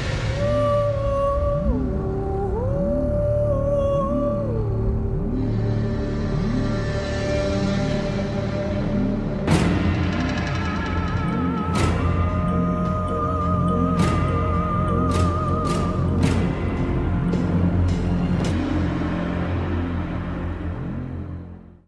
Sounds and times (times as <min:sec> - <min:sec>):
Scary music: 0:00.0 - 0:21.8.